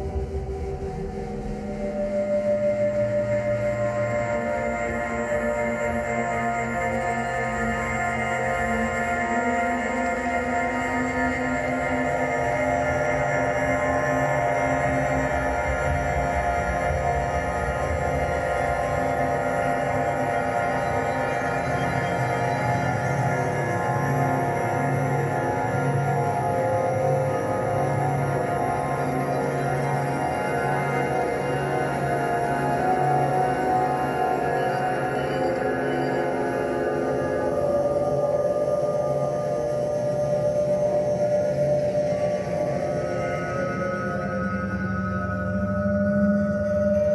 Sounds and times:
Music: 0.0s - 47.1s.

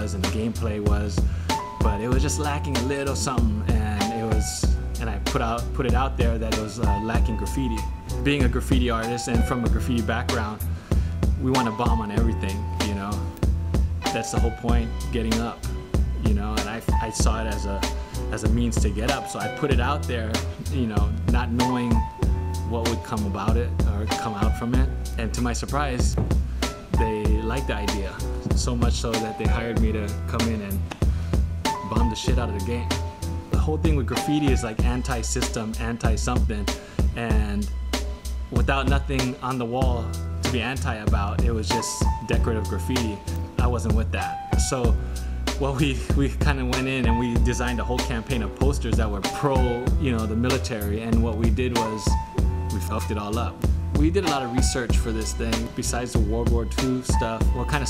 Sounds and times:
Speech: 0.0s - 1.2s, 1.8s - 10.7s, 11.4s - 13.2s, 14.1s - 15.6s, 16.2s - 26.2s, 27.0s - 30.8s, 31.8s - 33.0s, 33.6s - 37.7s, 38.5s - 45.0s, 45.6s - 57.8s
Music: 0.0s - 57.8s.

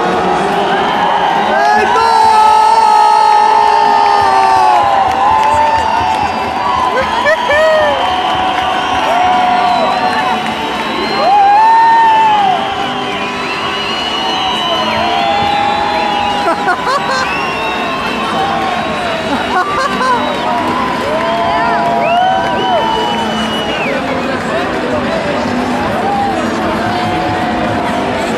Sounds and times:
Music: 0.0s - 28.3s.

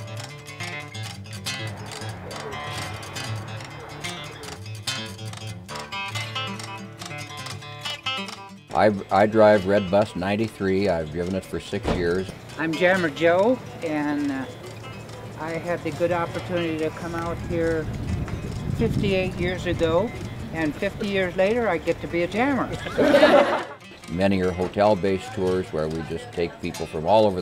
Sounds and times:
Music: 0.0s - 27.4s
Speech: 24.1s - 27.4s.

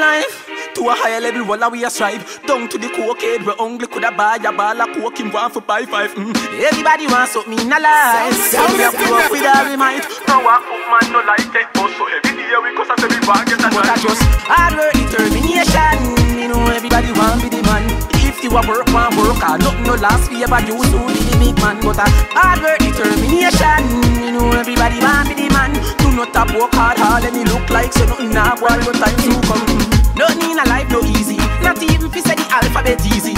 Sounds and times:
Afrobeat: 6.2s - 33.3s.

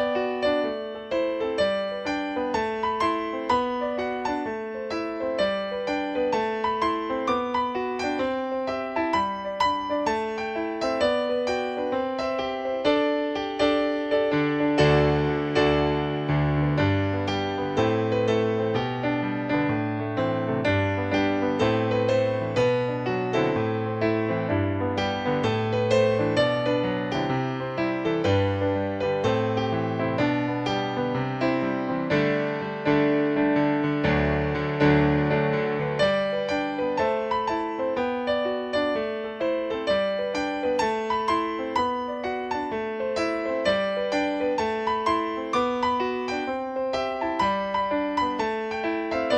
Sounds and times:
Music: 0.0s - 49.3s.

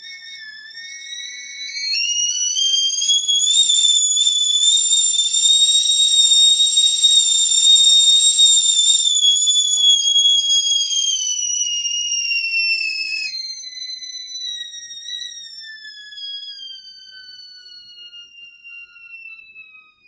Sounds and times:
Whistle: 0.0s - 20.0s.

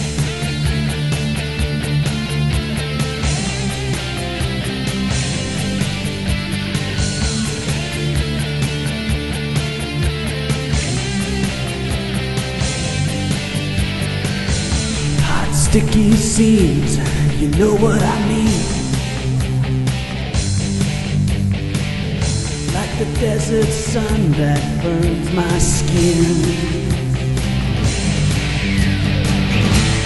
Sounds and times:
Music: 0.0s - 30.0s.

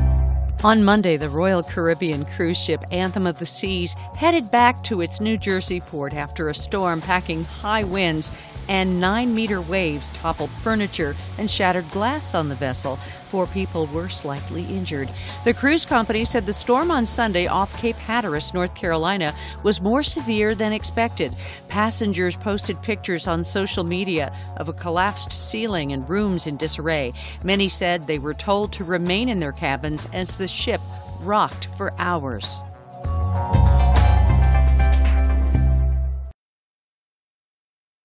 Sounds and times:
Music: 0.0s - 36.4s
Speech: 0.6s - 32.6s.

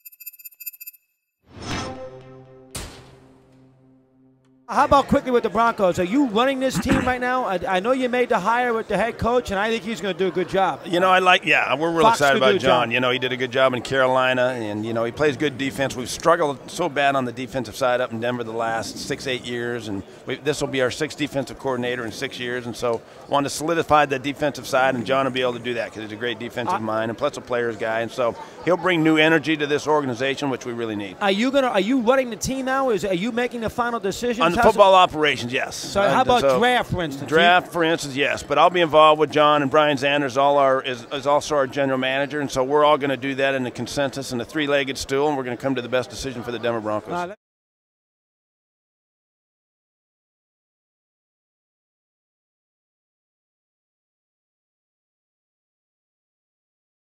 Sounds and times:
Speech: 4.7s - 47.4s.

